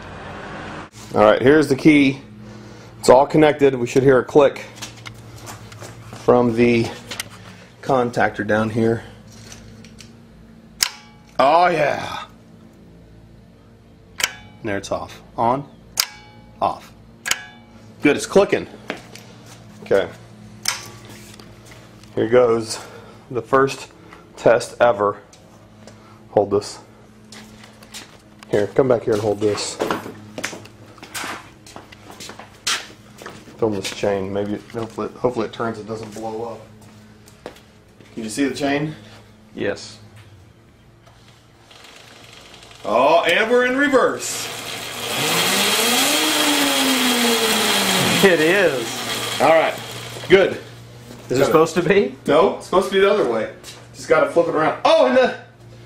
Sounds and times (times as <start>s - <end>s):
Motorcycle: 0.0s - 1.1s, 41.1s - 51.3s
Speech: 1.1s - 2.3s, 3.0s - 4.8s, 6.3s - 7.0s, 7.8s - 9.1s, 11.4s - 12.3s, 14.6s - 15.7s, 16.6s - 17.0s, 18.0s - 18.7s, 19.8s - 20.2s, 22.1s - 25.2s, 26.3s - 26.9s, 28.5s - 29.9s, 33.6s - 36.7s, 38.2s - 39.0s, 39.6s - 40.1s, 42.8s - 44.5s, 48.0s - 50.7s, 51.3s - 55.5s.